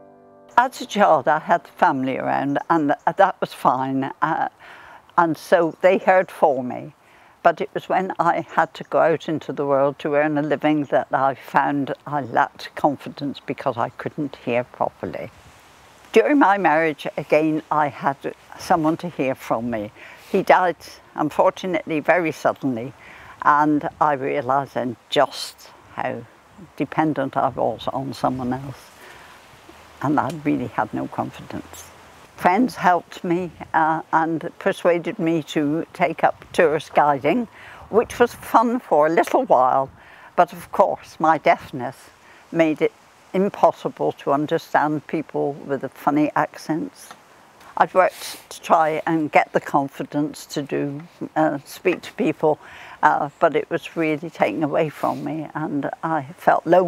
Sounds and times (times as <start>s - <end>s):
Speech: 0.6s - 4.6s, 5.2s - 15.3s, 16.1s - 28.9s, 30.0s - 47.2s, 47.8s - 56.8s.